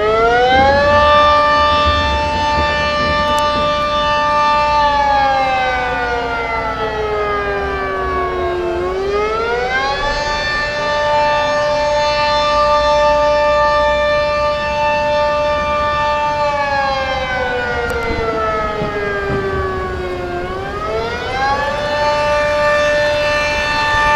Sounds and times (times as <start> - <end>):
Siren: 0.0 - 24.1.